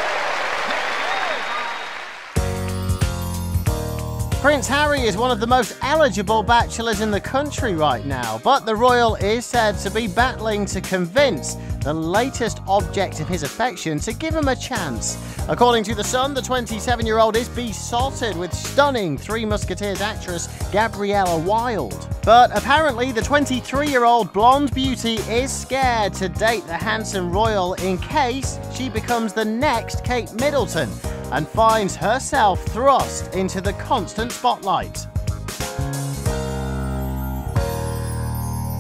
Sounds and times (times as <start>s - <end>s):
Music: 0.0s - 38.8s
Speech: 4.4s - 35.0s.